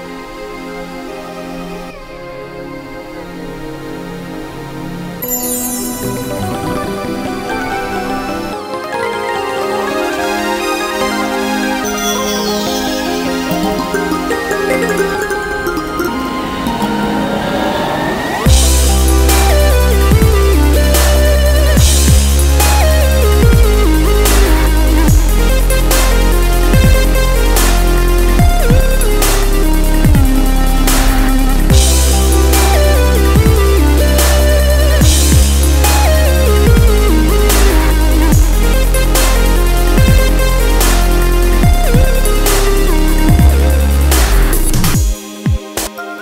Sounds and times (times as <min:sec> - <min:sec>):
Music: 0:00.0 - 0:46.2.